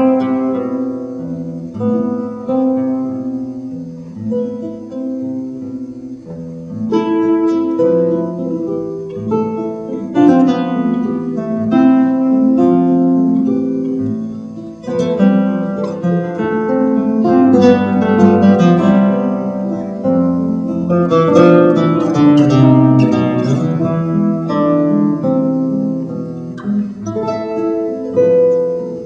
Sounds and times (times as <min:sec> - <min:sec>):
Acoustic guitar: 0:00.0 - 0:29.0
Strum: 0:00.0 - 0:29.0.